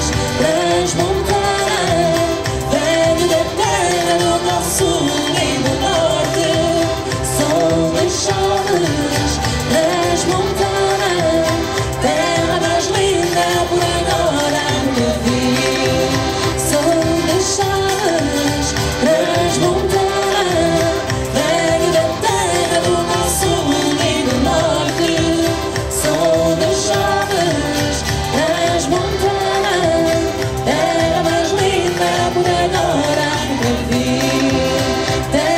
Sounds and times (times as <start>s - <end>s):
Music: 0.0s - 35.5s
Singing: 0.0s - 35.5s.